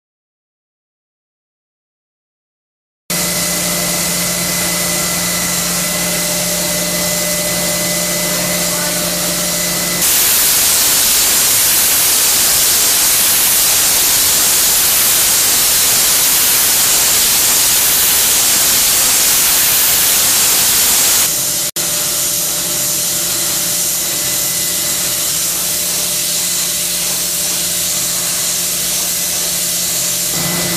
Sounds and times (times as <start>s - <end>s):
Power tool: 3.1s - 30.7s.